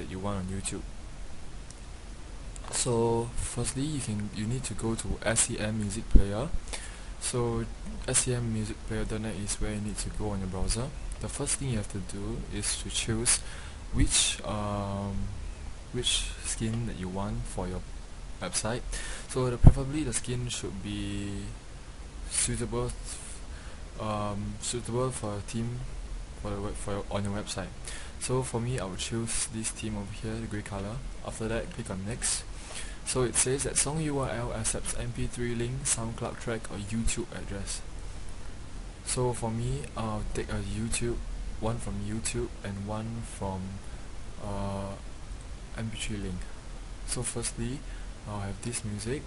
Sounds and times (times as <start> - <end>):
Speech: 0.0 - 0.9, 2.6 - 6.6, 7.2 - 21.6, 22.3 - 23.4, 24.0 - 32.5, 33.1 - 37.9, 39.0 - 45.1, 45.7 - 49.2.